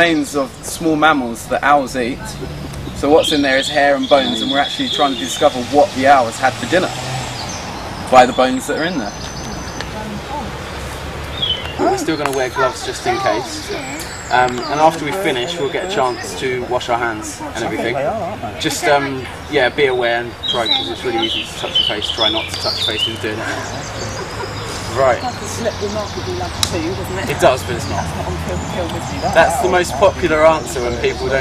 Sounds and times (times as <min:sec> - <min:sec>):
Speech: 0:00.0 - 0:06.8, 0:11.8 - 0:23.4
Bird: 0:00.0 - 0:31.4.